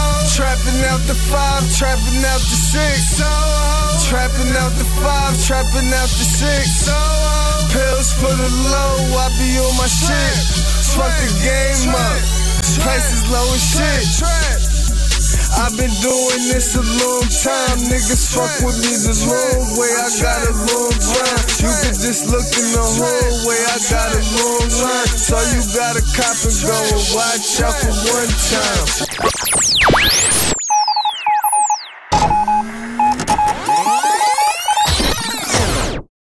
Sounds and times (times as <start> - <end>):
Hip hop music: 0.0 - 35.5.